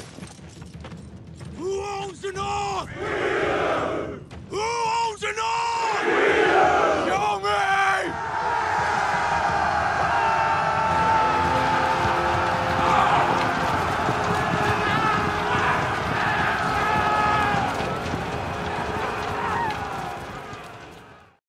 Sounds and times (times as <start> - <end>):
Music: 0.0 - 21.4.